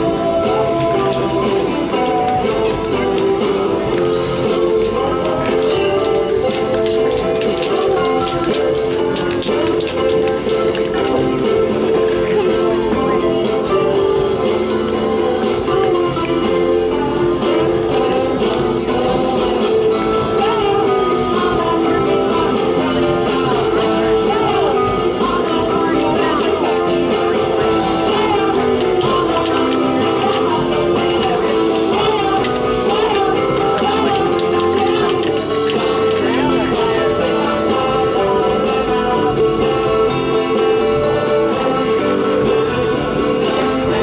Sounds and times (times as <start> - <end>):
Music: 0.0 - 44.0
Spray: 0.0 - 44.0.